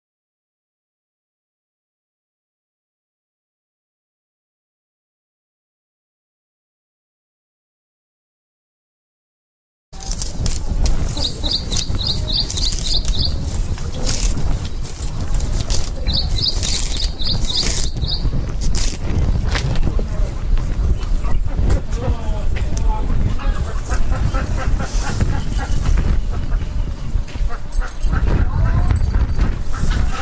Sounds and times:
Speech: 21.2 - 24.2.

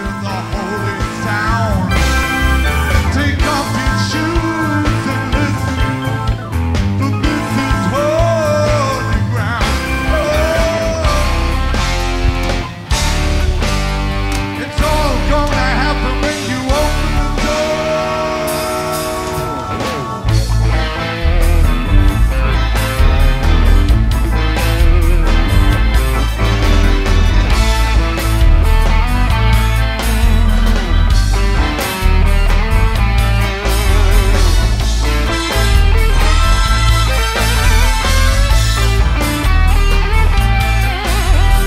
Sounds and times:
Music: 0.0 - 41.6.

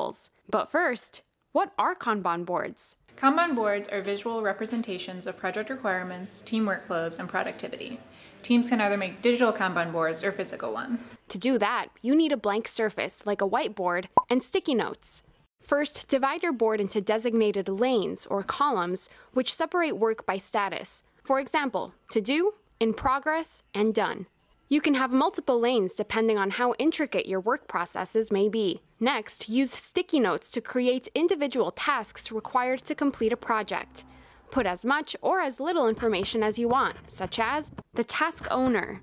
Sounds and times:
Speech: 0.0 - 39.0.

